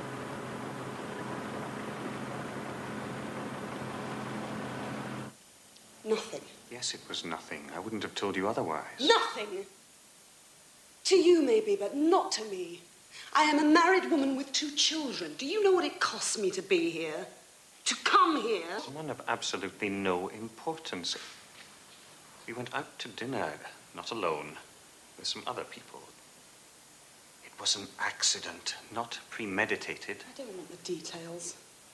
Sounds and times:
Speech: 0:06.1 - 0:09.7, 0:17.9 - 0:21.2, 0:22.5 - 0:26.1, 0:27.5 - 0:31.6.

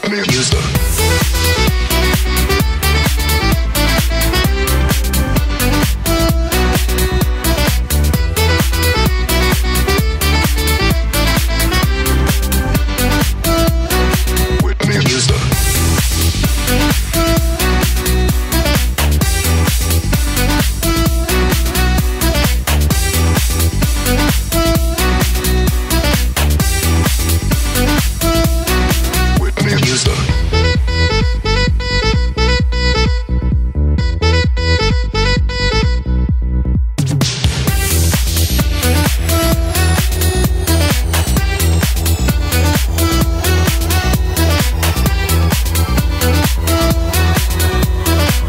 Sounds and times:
Music: 0:00.0 - 0:48.4.

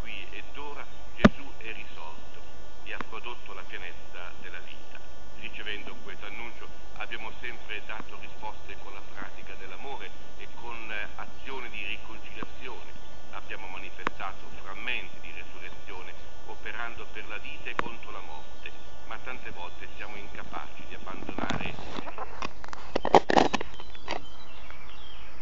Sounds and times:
Speech: 0:00.0 - 0:02.2, 0:02.9 - 0:22.1.

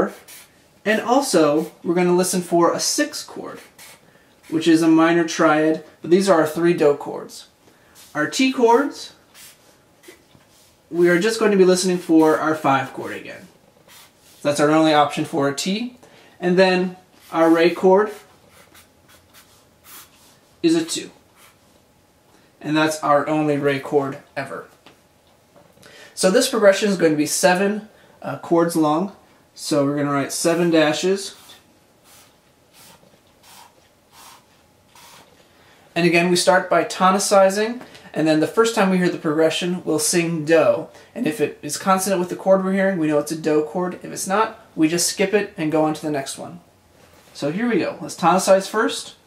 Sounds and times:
Speech: 0:00.0 - 0:00.2, 0:00.8 - 0:03.7, 0:04.5 - 0:07.5, 0:08.1 - 0:09.2, 0:10.9 - 0:13.5, 0:14.4 - 0:18.3, 0:20.6 - 0:21.2, 0:22.6 - 0:24.8, 0:26.2 - 0:31.6, 0:36.0 - 0:46.7, 0:47.4 - 0:49.2.

